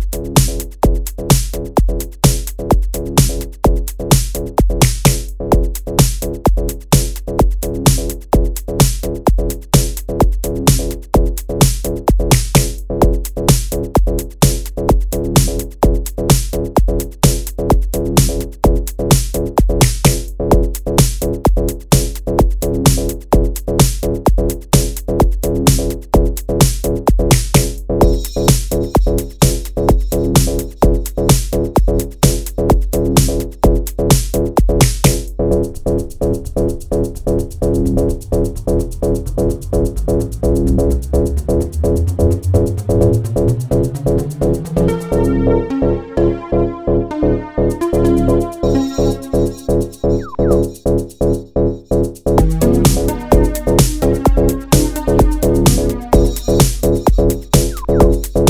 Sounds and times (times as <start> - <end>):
Techno: 0.0 - 58.4.